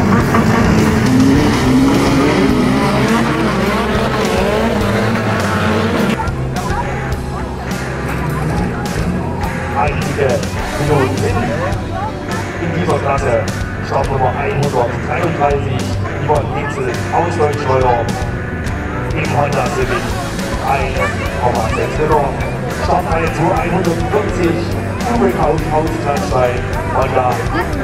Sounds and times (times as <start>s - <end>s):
Music: 0.0s - 27.8s
Speech: 6.2s - 18.4s, 19.0s - 27.8s.